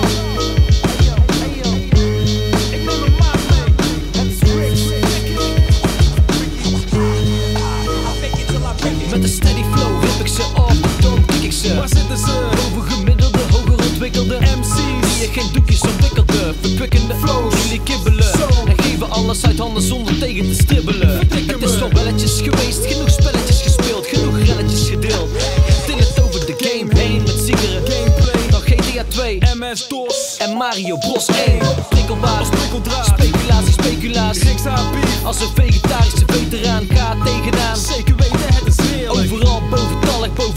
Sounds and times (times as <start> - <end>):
Music: 0.0 - 40.5.